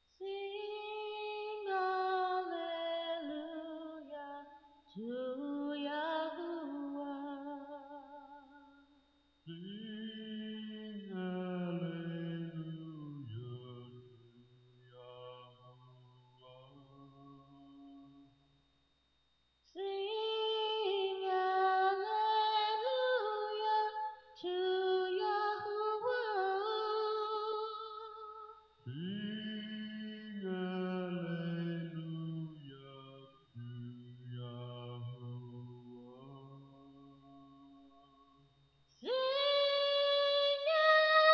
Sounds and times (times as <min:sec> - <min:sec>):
Male singing: 0:00.2 - 0:08.4, 0:09.5 - 0:18.2, 0:19.8 - 0:37.9, 0:39.0 - 0:41.3
Female singing: 0:00.2 - 0:08.6, 0:19.8 - 0:32.0, 0:39.0 - 0:41.3.